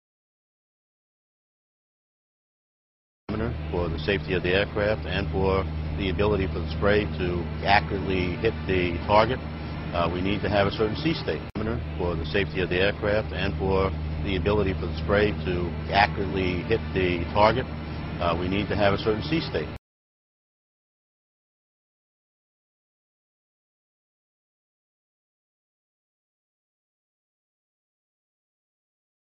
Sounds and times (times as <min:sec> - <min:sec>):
Speech: 0:03.3 - 0:19.8.